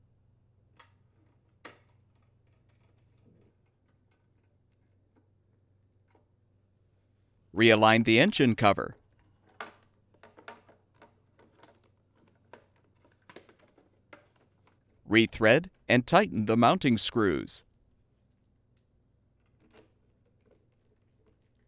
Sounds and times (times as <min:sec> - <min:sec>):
Speech: 0:07.6 - 0:09.0, 0:15.1 - 0:17.6.